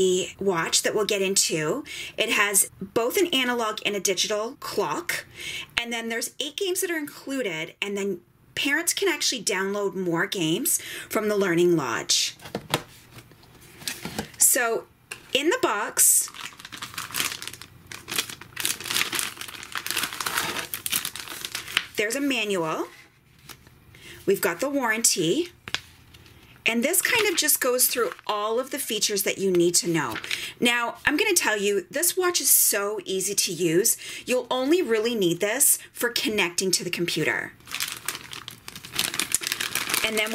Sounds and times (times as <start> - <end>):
Speech: 0.0 - 12.4, 14.4 - 16.3, 22.0 - 23.0, 24.3 - 25.6, 26.7 - 37.6, 40.0 - 40.3
Inside, small room: 0.0 - 40.3
Crumpling, crinkling: 16.2 - 22.0, 22.9 - 23.7, 25.6 - 29.0, 30.1 - 30.4, 37.6 - 40.3.